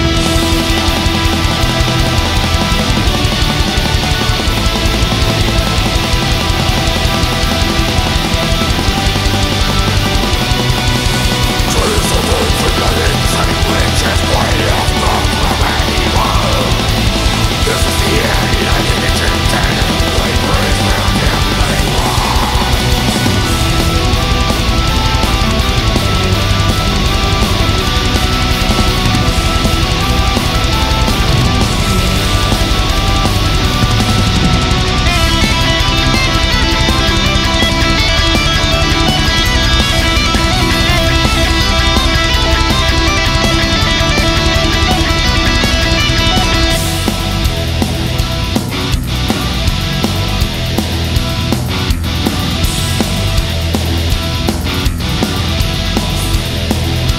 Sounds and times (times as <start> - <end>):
Heavy metal: 0.0 - 57.1.